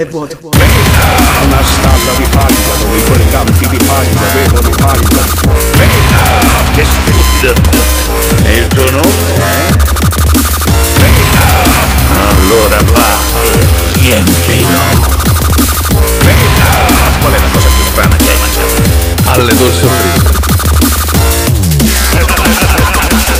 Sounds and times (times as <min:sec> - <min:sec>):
Dubstep: 0:00.6 - 0:23.3.